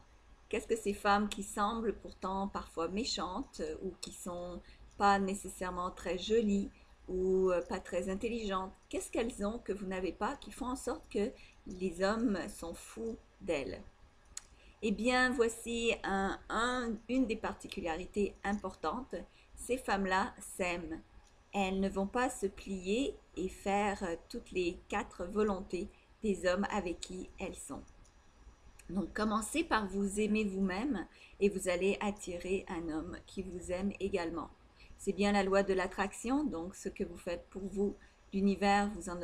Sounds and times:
Speech: 0.5 - 13.8, 14.8 - 21.0, 21.6 - 27.8, 28.8 - 39.2.

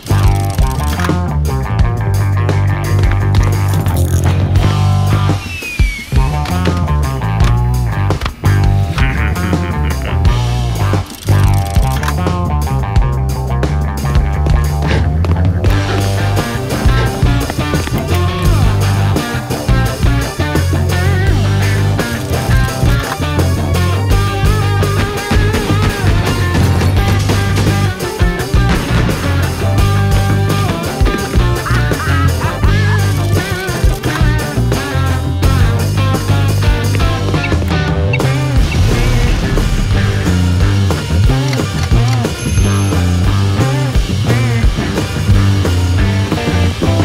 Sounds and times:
Music: 0.0 - 47.0.

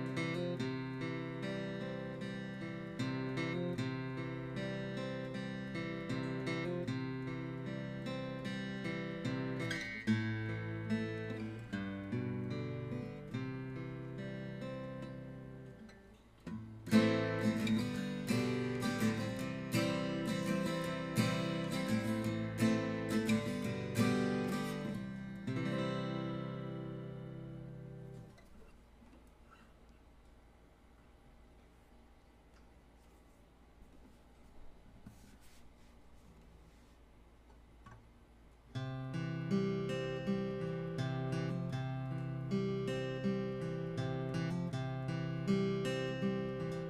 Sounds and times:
Strum: 16.5 - 28.7.

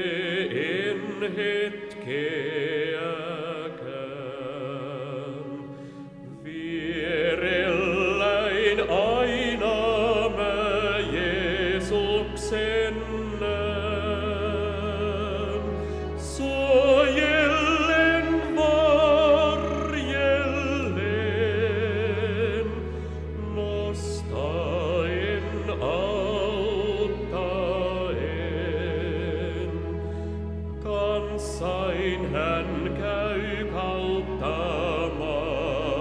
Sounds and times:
Music: 0.0 - 36.0.

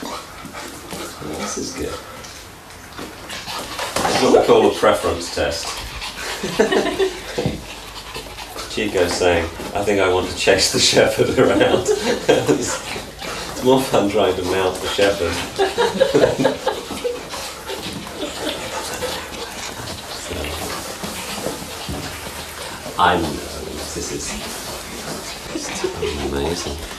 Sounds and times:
Dog: 0.0 - 26.9
Speech: 4.1 - 5.7, 8.7 - 12.8, 13.6 - 15.4, 23.0 - 24.5, 25.6 - 26.9.

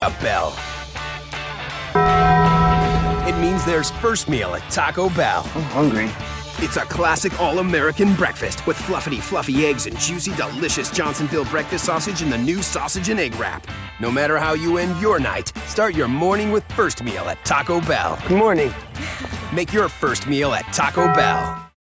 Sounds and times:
Speech: 0.0 - 0.6, 3.3 - 18.8, 19.5 - 21.5
Music: 0.0 - 21.8.

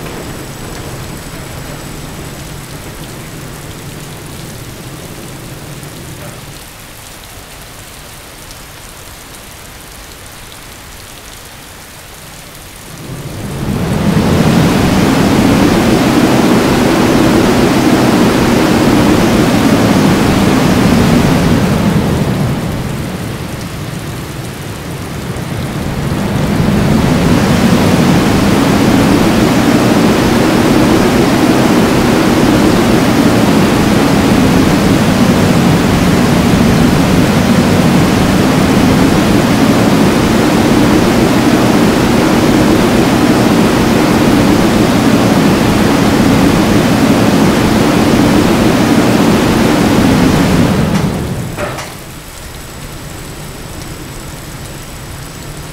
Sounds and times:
Rain on surface: 0.0 - 55.7.

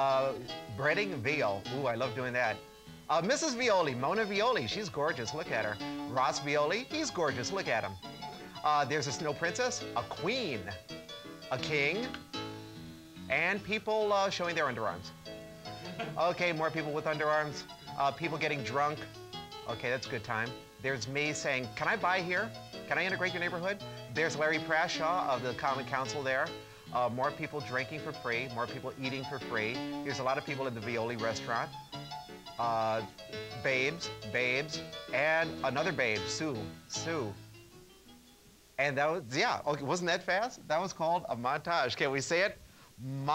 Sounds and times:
Speech: 0.0 - 8.0, 8.6 - 10.8, 11.5 - 12.2, 13.3 - 15.1, 15.9 - 19.1, 19.7 - 31.7, 32.6 - 37.4, 38.8 - 43.3
Music: 0.0 - 43.3.

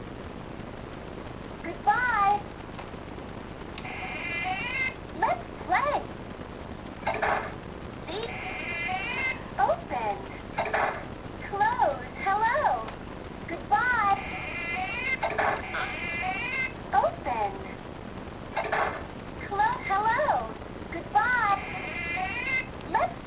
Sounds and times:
Speech: 8.1 - 8.4, 9.6 - 10.4, 11.4 - 14.2, 16.9 - 17.8, 19.4 - 23.2.

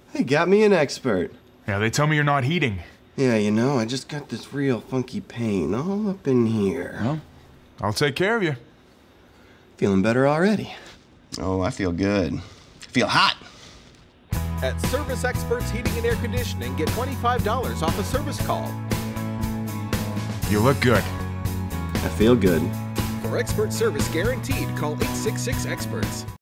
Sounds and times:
Speech: 0.1 - 8.6, 9.8 - 13.4, 14.6 - 18.7, 20.5 - 21.1, 22.0 - 26.3
Music: 14.3 - 26.4.

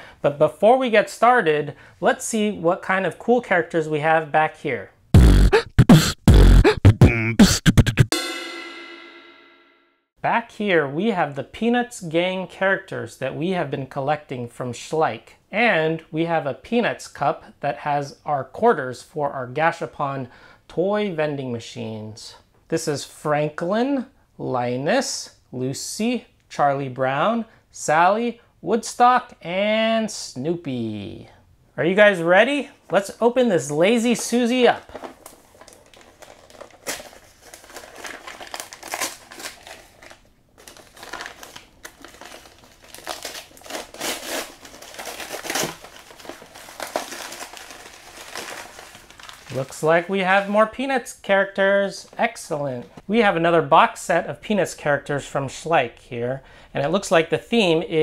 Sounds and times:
Beatboxing: 5.2 - 8.2.

